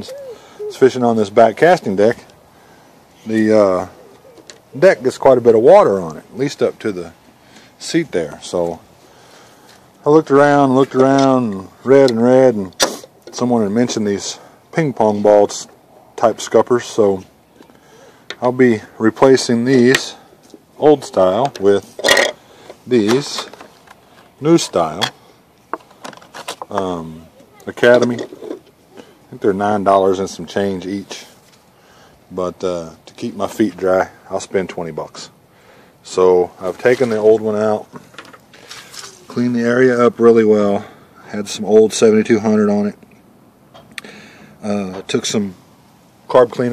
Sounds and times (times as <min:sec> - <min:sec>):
Speech: 0:00.0 - 0:02.3, 0:03.2 - 0:04.0, 0:04.8 - 0:07.2, 0:07.8 - 0:08.8, 0:10.0 - 0:17.3, 0:18.4 - 0:20.2, 0:20.8 - 0:21.9, 0:22.9 - 0:23.5, 0:24.4 - 0:25.1, 0:26.7 - 0:28.3, 0:29.3 - 0:31.4, 0:32.3 - 0:35.4, 0:36.0 - 0:37.9, 0:39.3 - 0:43.0, 0:44.6 - 0:45.6, 0:46.3 - 0:46.7.